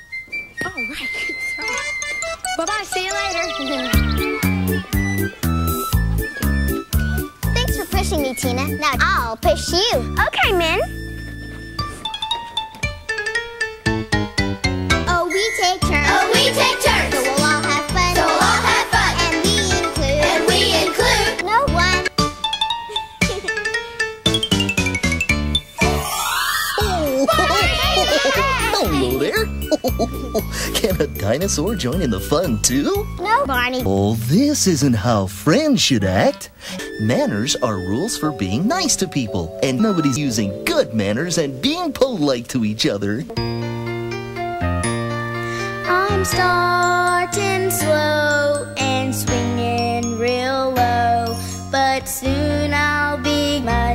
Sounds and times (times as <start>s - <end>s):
Music: 0.0s - 53.9s.